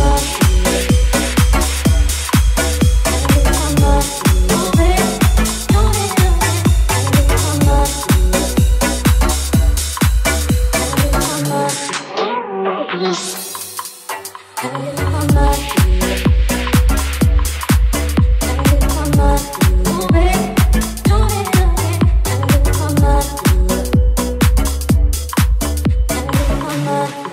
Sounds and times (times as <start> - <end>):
Dance music: 0.0 - 27.3
Disco: 0.0 - 27.3.